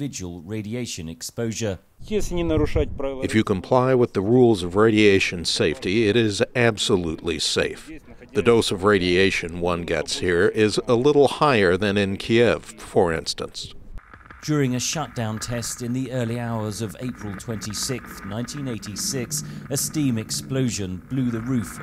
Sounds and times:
Speech: 0.0 - 13.7, 14.4 - 21.8.

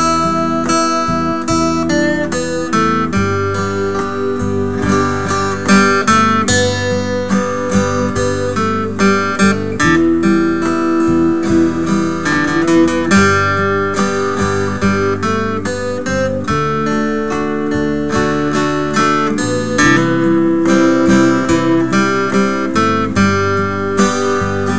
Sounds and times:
Music: 0.0 - 24.7.

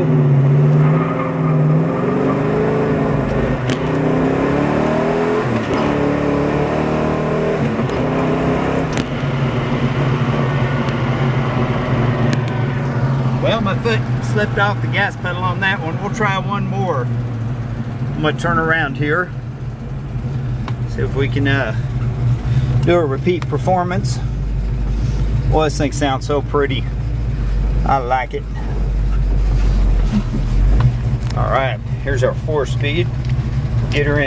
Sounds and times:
Car: 0.0 - 34.2
Speech: 13.4 - 17.1, 18.2 - 19.3, 20.9 - 21.8, 22.9 - 24.2, 25.5 - 26.9, 27.8 - 28.6, 31.4 - 33.1, 33.9 - 34.2.

